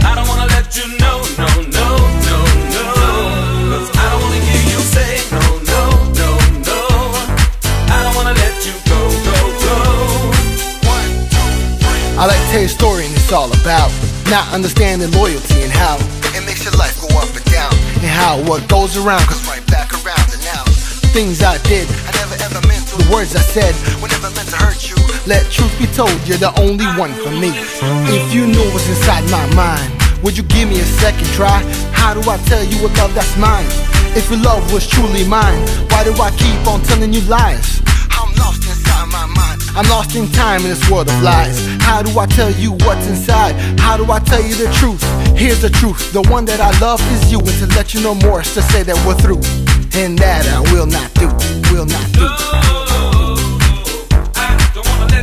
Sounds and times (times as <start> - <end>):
Music: 0.0 - 55.2.